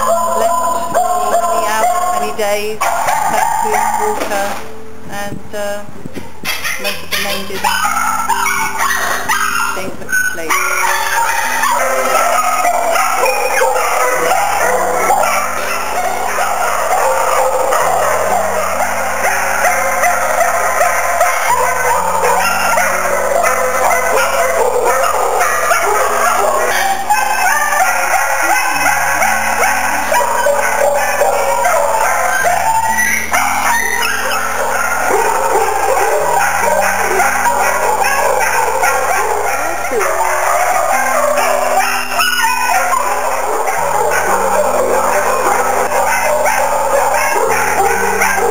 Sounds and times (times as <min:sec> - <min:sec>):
Bow-wow: 0:00.0 - 0:04.5, 0:06.5 - 0:48.5.